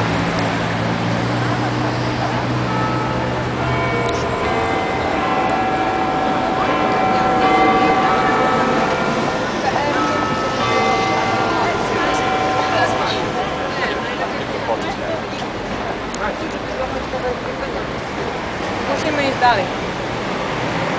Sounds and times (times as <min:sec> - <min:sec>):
Speech: 0:18.8 - 0:19.8.